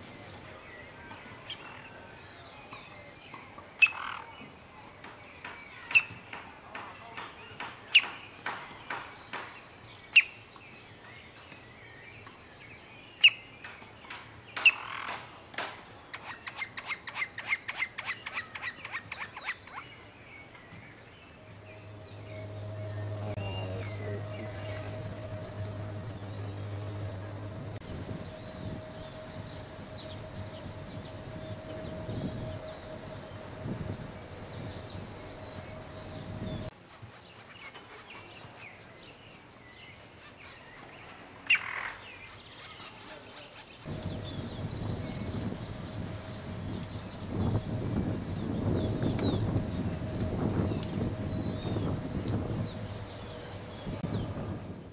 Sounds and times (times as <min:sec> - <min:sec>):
Bird: 0:00.0 - 0:12.4, 0:13.1 - 0:15.4.